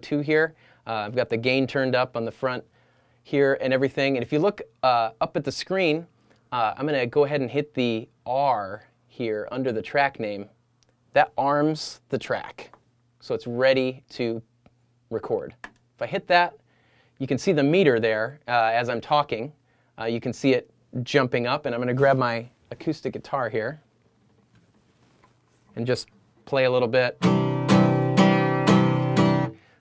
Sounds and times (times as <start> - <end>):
Speech: 0.0 - 2.7, 3.3 - 14.5, 15.1 - 16.6, 17.2 - 23.8, 25.8 - 27.2.